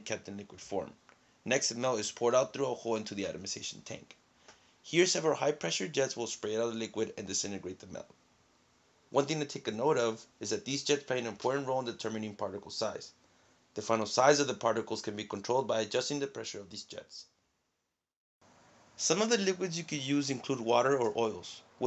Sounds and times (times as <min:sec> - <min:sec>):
Speech: 0:00.0 - 0:04.2, 0:04.9 - 0:08.2, 0:09.2 - 0:13.2, 0:13.8 - 0:17.3, 0:19.0 - 0:21.8.